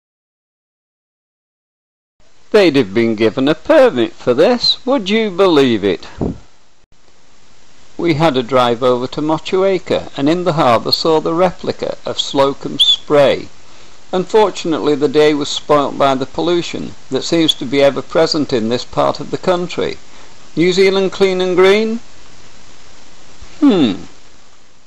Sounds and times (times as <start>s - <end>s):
Speech: 2.6s - 6.4s, 8.0s - 13.5s, 14.1s - 20.0s, 20.6s - 22.1s, 23.6s - 24.1s.